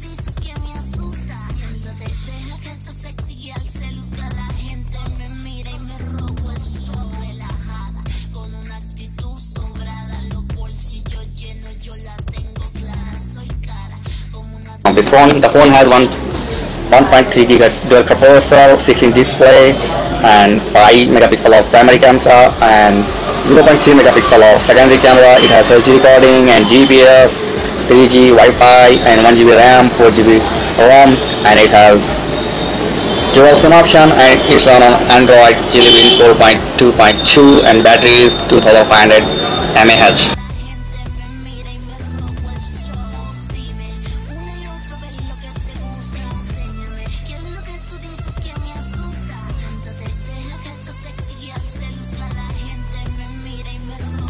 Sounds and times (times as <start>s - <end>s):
Music: 0.0s - 54.2s.